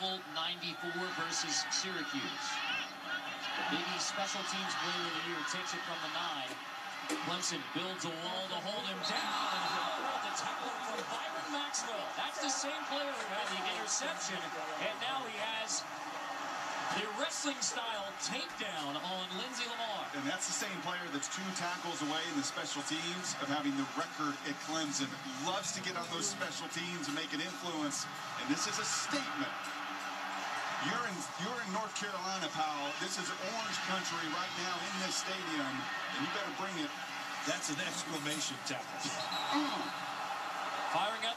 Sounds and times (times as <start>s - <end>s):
Speech: 0.0s - 2.6s, 3.5s - 6.6s, 7.2s - 15.9s, 16.9s - 29.6s, 30.8s - 39.9s, 40.9s - 41.3s.